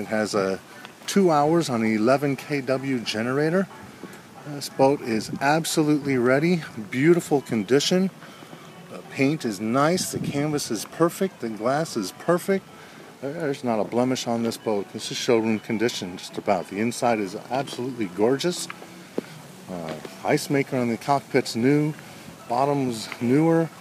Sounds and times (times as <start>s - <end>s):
Speech: 0.0s - 3.7s, 4.4s - 8.2s, 8.9s - 12.6s, 13.2s - 18.7s, 19.7s - 23.8s
Music: 0.0s - 23.8s.